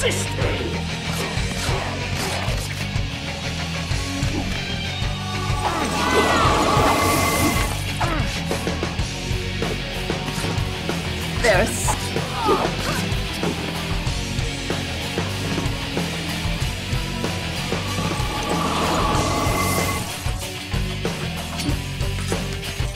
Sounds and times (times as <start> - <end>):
Speech: 0.0 - 2.6, 11.4 - 13.1
Music: 0.0 - 22.9.